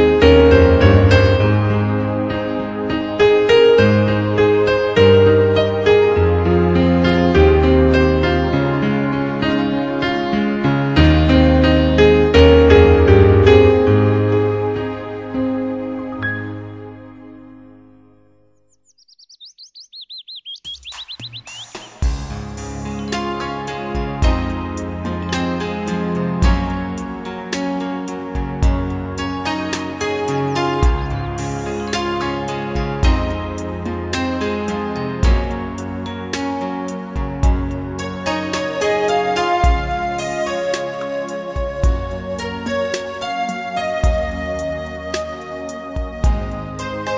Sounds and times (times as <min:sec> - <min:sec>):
Chirp, tweet: 0:18.5 - 0:22.0, 0:22.9 - 0:23.3.